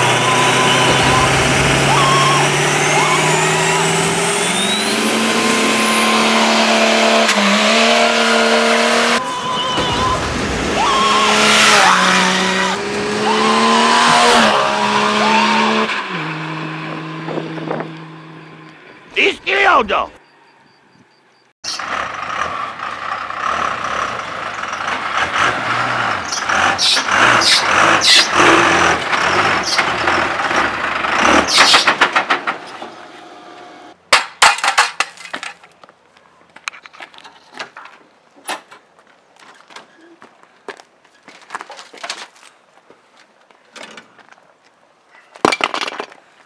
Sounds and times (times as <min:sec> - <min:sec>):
Tire squeal: 0:00.0 - 0:06.6, 0:07.2 - 0:16.6, 0:25.7 - 0:30.2, 0:31.2 - 0:32.0.